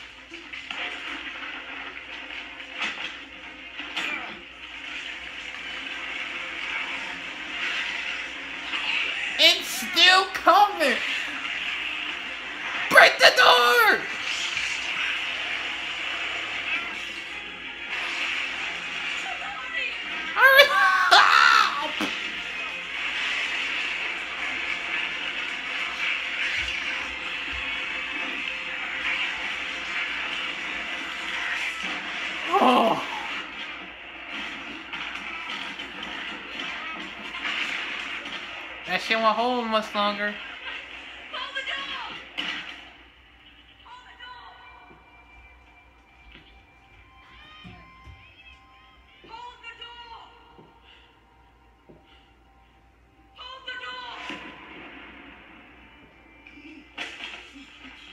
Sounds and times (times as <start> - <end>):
Speech: 9.4 - 11.1, 12.9 - 14.1.